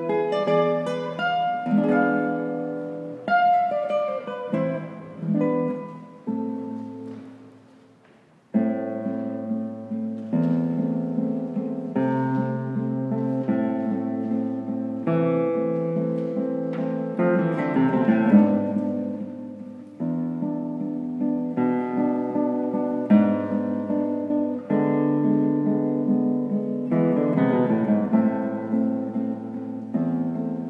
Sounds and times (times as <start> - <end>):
Acoustic guitar: 0.0 - 30.6.